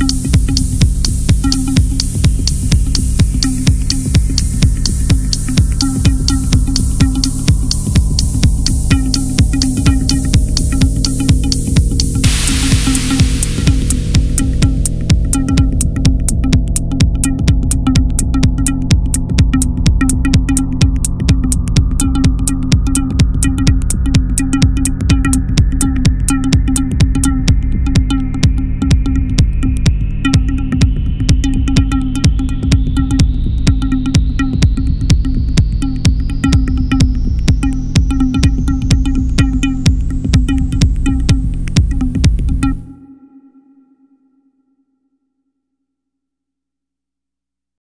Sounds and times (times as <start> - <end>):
Techno: 0.0 - 43.0.